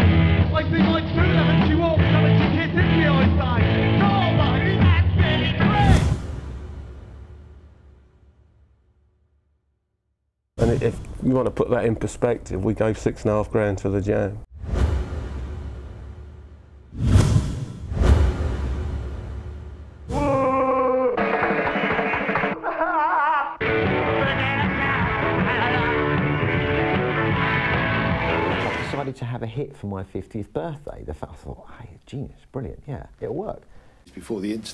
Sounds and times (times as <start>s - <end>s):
Rock and roll: 0.0s - 6.2s, 21.1s - 22.8s, 23.6s - 29.0s
Speech: 10.6s - 14.4s, 28.9s - 34.7s.